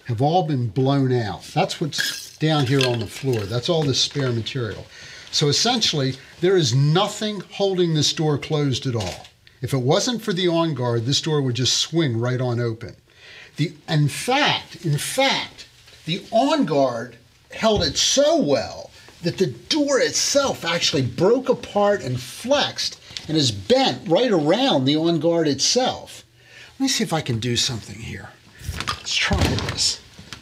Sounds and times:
Speech: 0.0s - 13.0s, 13.6s - 30.1s.

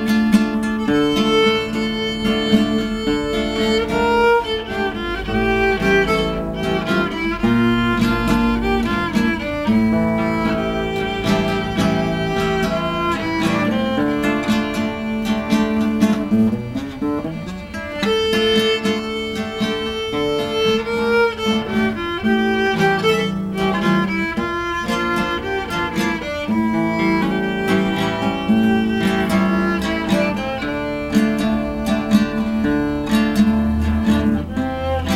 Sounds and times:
Violin, fiddle: 0.0s - 35.1s.

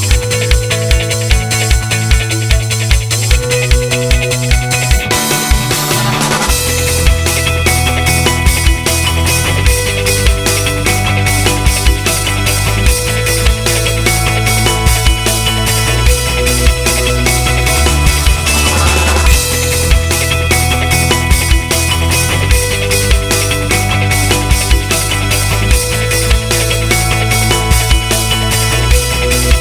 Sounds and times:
Music: 0.0s - 29.6s.

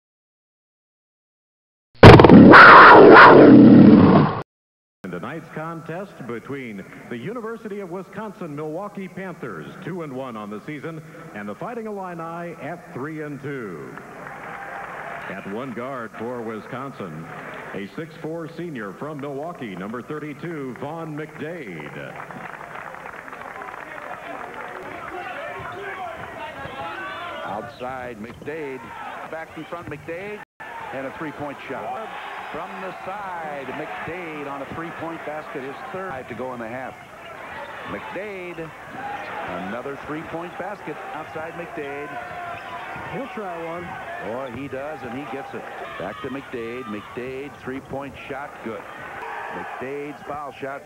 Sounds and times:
Speech: 5.0s - 14.0s, 15.3s - 22.2s, 23.8s - 37.0s, 37.8s - 38.8s, 39.4s - 42.4s, 43.0s - 48.9s, 49.5s - 50.8s
Inside, public space: 5.1s - 50.8s.

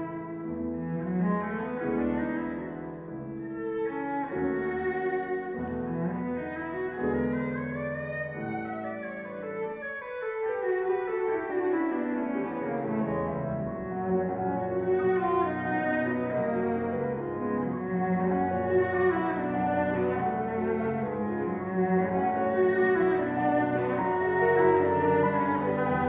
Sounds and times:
Cello: 0.0s - 26.0s
Sad music: 0.0s - 26.0s.

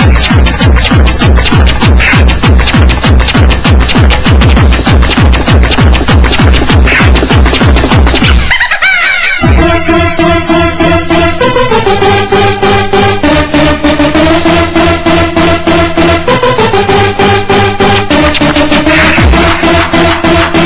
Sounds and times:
Music: 0.0s - 20.6s.

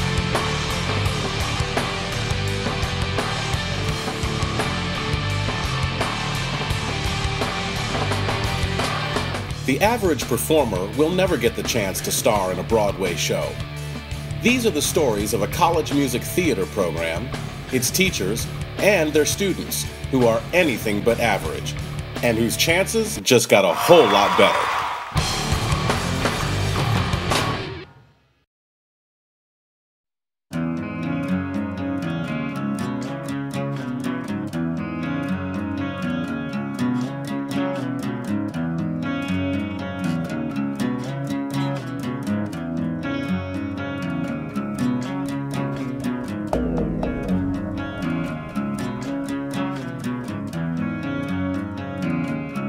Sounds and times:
Music: 0.0s - 28.4s, 30.5s - 52.6s
Speech: 9.7s - 13.6s, 14.4s - 24.8s.

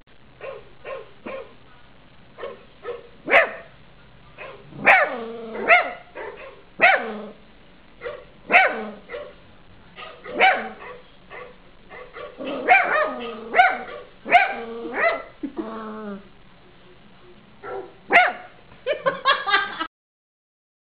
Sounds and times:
Bark: 0.4s - 1.6s, 2.4s - 3.7s, 4.4s - 7.2s, 8.0s - 9.4s, 10.0s - 15.3s, 17.6s - 18.6s
Canidae, dogs, wolves: 0.4s - 1.6s, 4.4s - 7.4s, 8.0s - 9.4s, 10.0s - 15.3s, 17.6s - 18.5s.

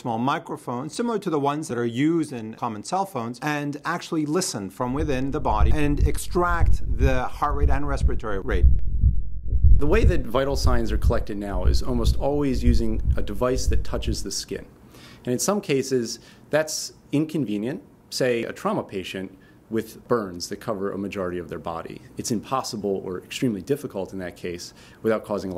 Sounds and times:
Speech: 0.0s - 8.6s, 9.8s - 25.5s.

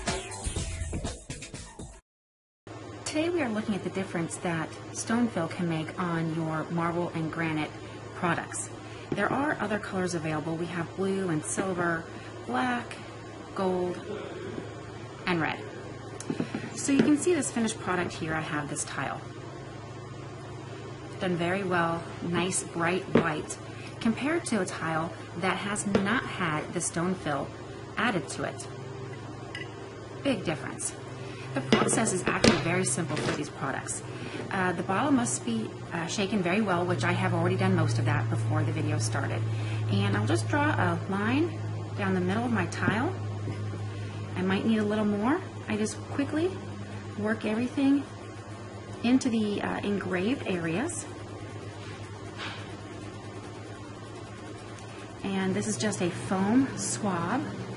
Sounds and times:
Speech: 3.1s - 13.0s, 13.6s - 14.5s, 15.3s - 15.7s, 16.8s - 19.2s, 21.2s - 28.7s, 30.3s - 31.0s, 31.6s - 43.2s, 44.4s - 46.6s, 47.2s - 48.1s, 49.0s - 51.1s, 55.2s - 57.6s.

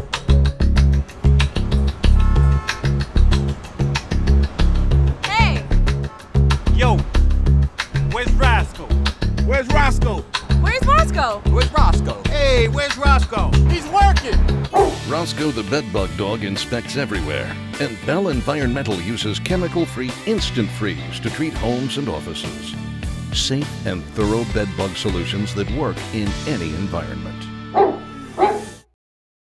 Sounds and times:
Music: 0.0s - 29.0s
Speech: 5.3s - 5.6s, 6.8s - 7.0s, 8.0s - 8.9s, 9.5s - 14.4s, 15.0s - 22.8s, 23.4s - 27.5s.

